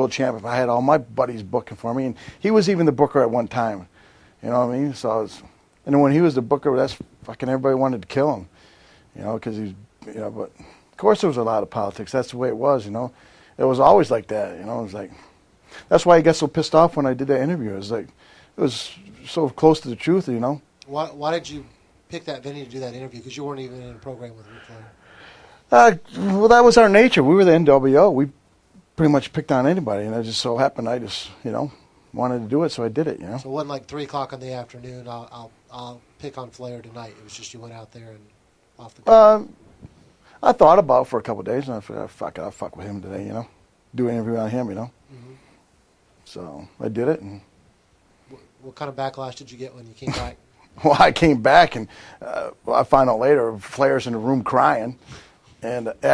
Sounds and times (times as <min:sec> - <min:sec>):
Speech: 0:00.0 - 0:08.5, 0:09.2 - 0:15.2, 0:15.9 - 0:25.0, 0:25.7 - 0:28.4, 0:29.0 - 0:39.5, 0:40.4 - 0:45.4, 0:46.3 - 0:47.5, 0:48.3 - 0:55.0, 0:55.6 - 0:56.1.